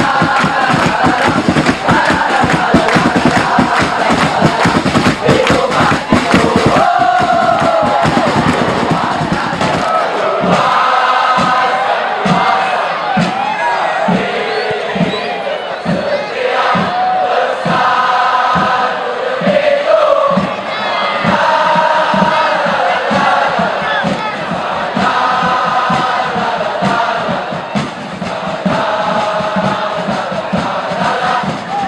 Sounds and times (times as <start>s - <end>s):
Inside, public space: 0.0s - 31.8s.